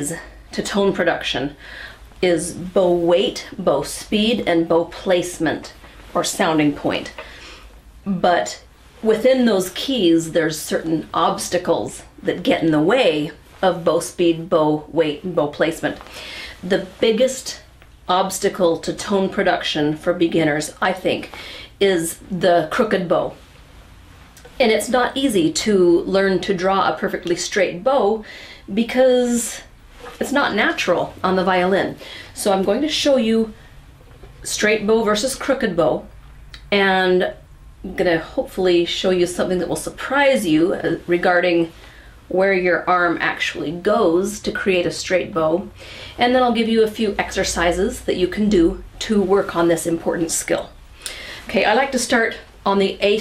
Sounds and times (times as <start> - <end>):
Speech: 0.0 - 1.6, 2.2 - 7.2, 8.0 - 23.4, 24.4 - 33.6, 34.4 - 50.8, 51.4 - 53.2.